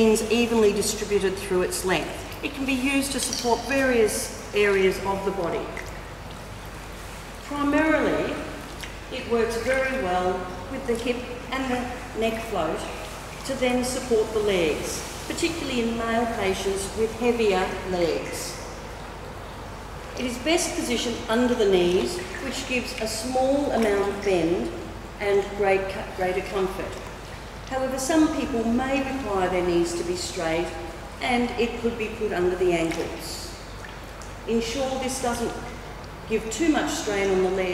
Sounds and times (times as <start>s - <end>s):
Speech: 0.0s - 5.8s, 7.5s - 18.6s, 20.2s - 27.1s, 27.7s - 33.6s, 34.5s - 37.7s.